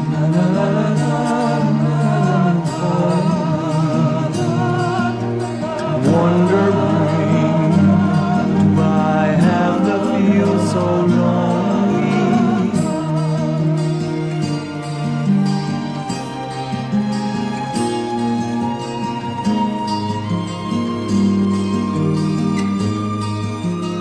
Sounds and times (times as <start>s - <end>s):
Singing: 0.0s - 14.5s
Music: 0.0s - 24.0s.